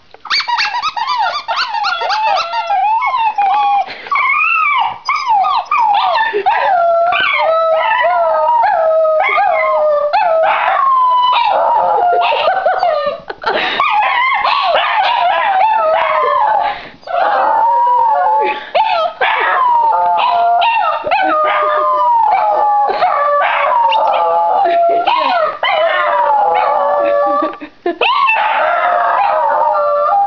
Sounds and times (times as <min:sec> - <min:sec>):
Howl: 0:01.0 - 0:13.0, 0:13.9 - 0:30.2.